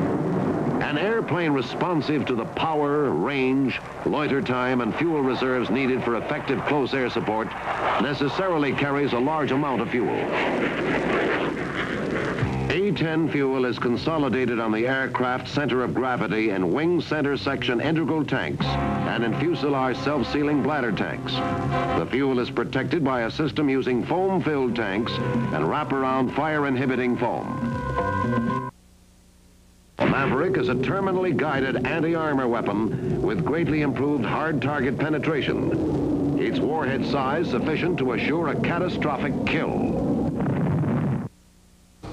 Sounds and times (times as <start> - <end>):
Speech: 0.8 - 10.3, 12.7 - 27.6, 30.0 - 35.8, 36.4 - 40.0
Music: 12.4 - 28.8.